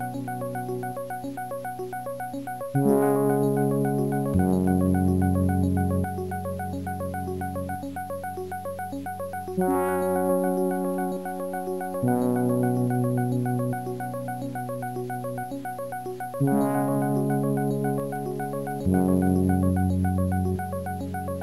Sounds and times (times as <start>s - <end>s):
Music: 0.0s - 21.4s.